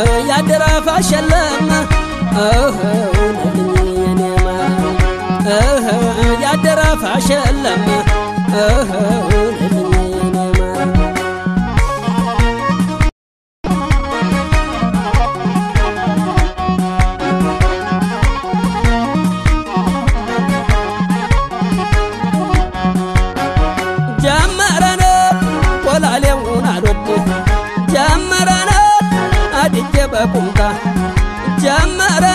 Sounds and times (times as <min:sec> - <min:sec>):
Music: 0:00.0 - 0:32.3.